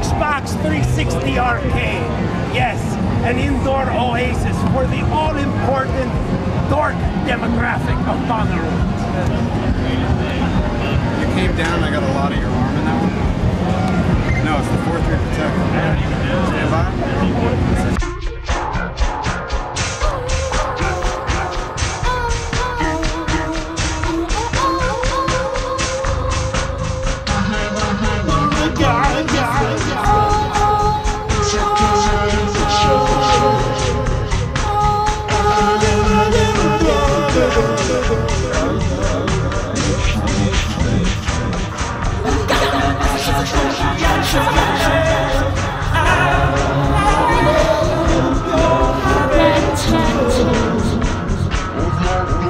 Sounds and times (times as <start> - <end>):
Music: 0.0 - 52.4.